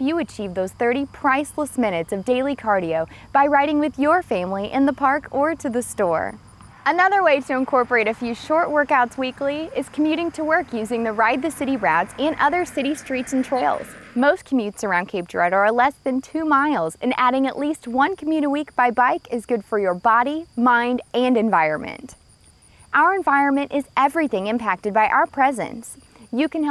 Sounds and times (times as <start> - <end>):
Speech: 0.0 - 22.2, 23.0 - 26.7.